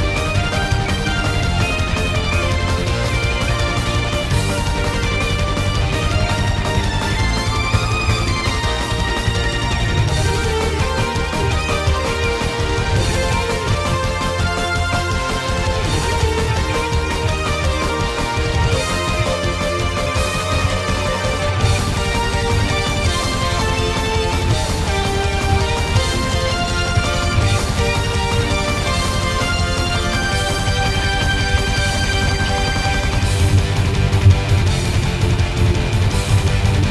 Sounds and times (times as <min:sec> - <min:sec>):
Bass guitar: 0:00.0 - 0:36.9.